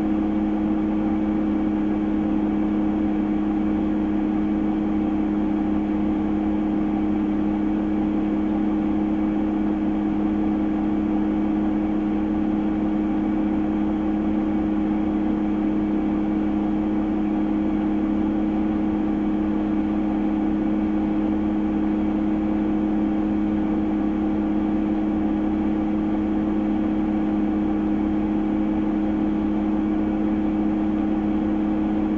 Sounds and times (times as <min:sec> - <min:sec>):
Vehicle: 0:00.0 - 0:32.1.